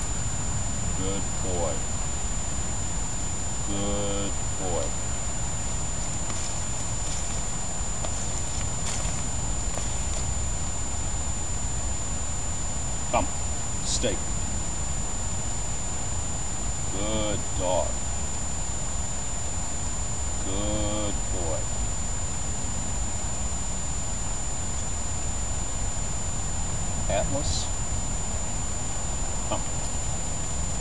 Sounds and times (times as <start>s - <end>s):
Speech: 1.0s - 1.8s, 3.7s - 5.0s, 13.1s - 14.3s, 16.9s - 18.0s, 20.4s - 21.7s, 27.1s - 27.8s.